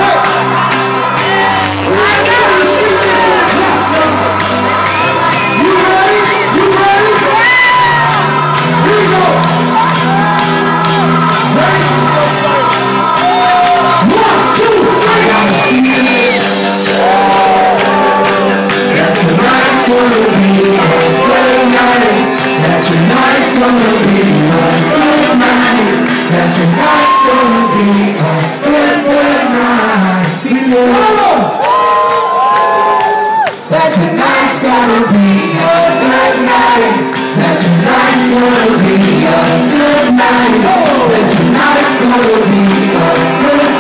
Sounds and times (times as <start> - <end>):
Music: 0.0 - 43.8
Male singing: 1.4 - 4.4, 5.3 - 8.2, 13.9 - 31.5, 33.7 - 43.8.